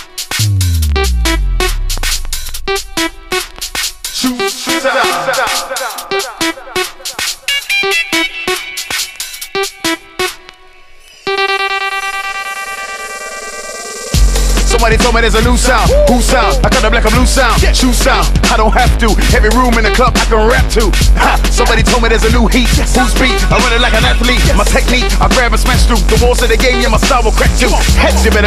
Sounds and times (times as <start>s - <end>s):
Music: 0.0s - 28.4s.